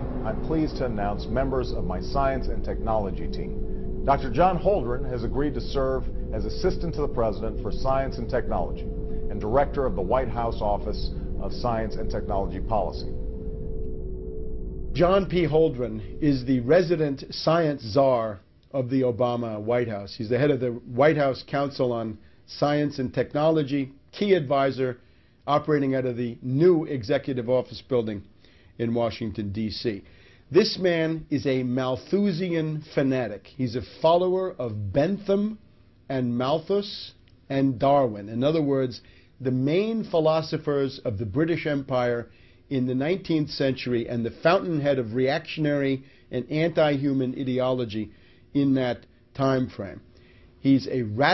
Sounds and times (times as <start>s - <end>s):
Speech: 0.2s - 3.5s, 4.1s - 13.1s, 15.0s - 50.0s, 50.6s - 51.3s.